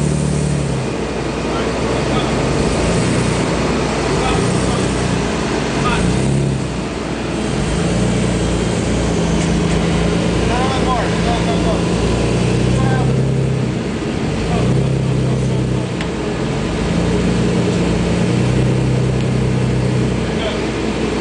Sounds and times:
Car: 0.0s - 21.2s
Speech: 1.5s - 2.4s, 4.1s - 5.0s, 5.8s - 6.2s, 10.5s - 11.9s, 12.7s - 13.3s, 14.4s - 14.9s, 20.2s - 20.7s.

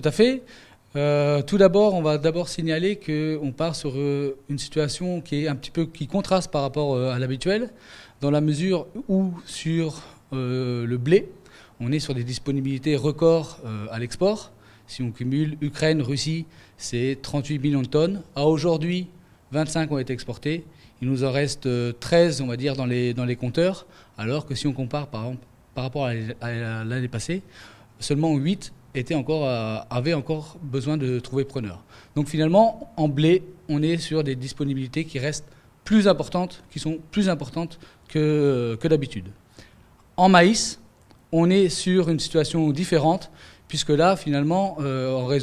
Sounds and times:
Speech: 0.0s - 39.4s, 40.2s - 45.4s.

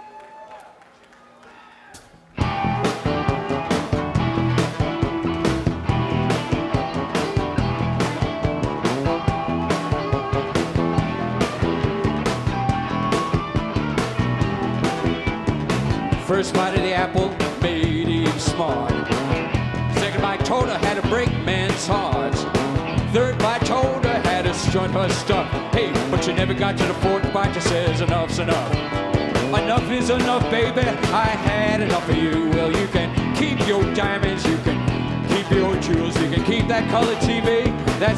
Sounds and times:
Rock and roll: 1.9s - 38.1s.

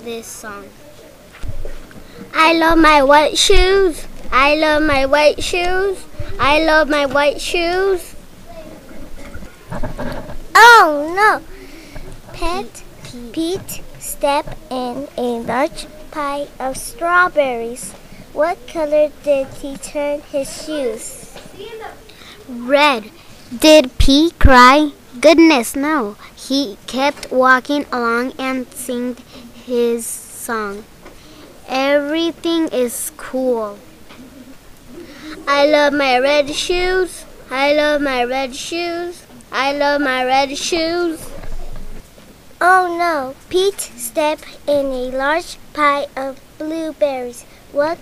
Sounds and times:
Speech: 0.0s - 1.0s, 2.3s - 8.8s, 10.6s - 11.4s, 12.4s - 30.8s, 31.7s - 33.8s, 42.6s - 48.0s.

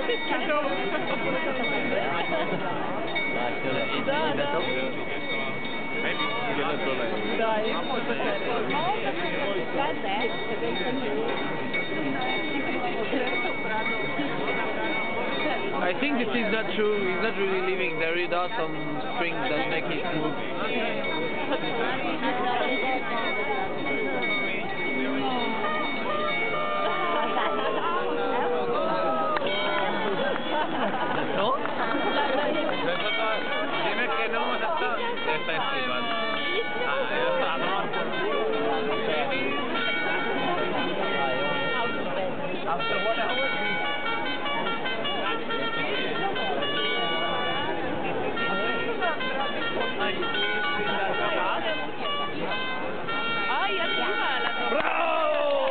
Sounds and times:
Speech: 0.0s - 55.7s.

